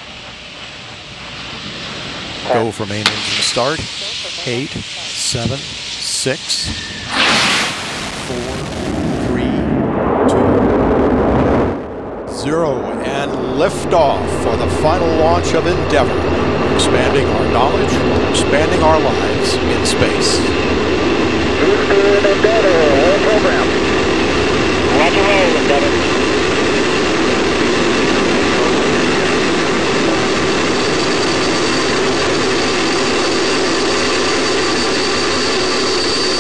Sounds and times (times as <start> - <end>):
Speech: 2.5 - 6.8, 8.3 - 10.6, 12.3 - 20.6, 21.6 - 23.8, 24.9 - 26.0.